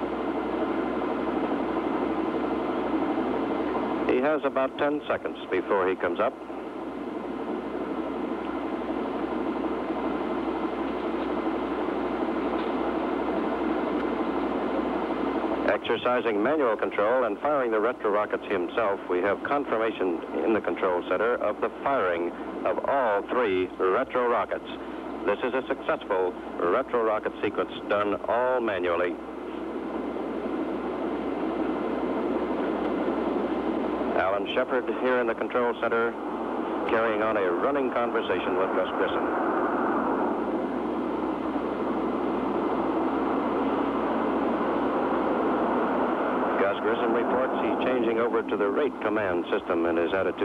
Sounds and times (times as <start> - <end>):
Speech: 4.1 - 6.4, 15.7 - 29.2, 34.2 - 36.2, 36.9 - 39.3, 46.6 - 50.4.